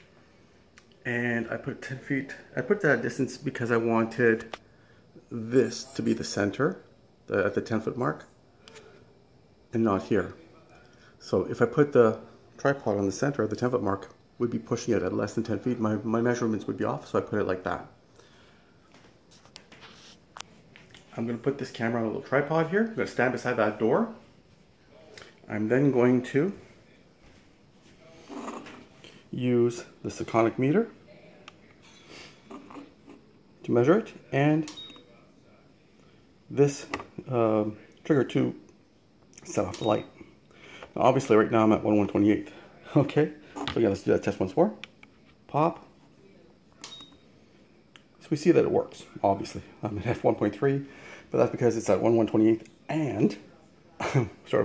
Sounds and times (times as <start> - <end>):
Speech: 1.0 - 4.5, 5.2 - 8.3, 9.7 - 18.0, 21.1 - 24.2, 24.9 - 27.0, 29.3 - 31.8, 33.6 - 35.8, 36.5 - 38.6, 39.4 - 40.2, 41.0 - 44.8, 45.5 - 46.5, 48.2 - 54.6.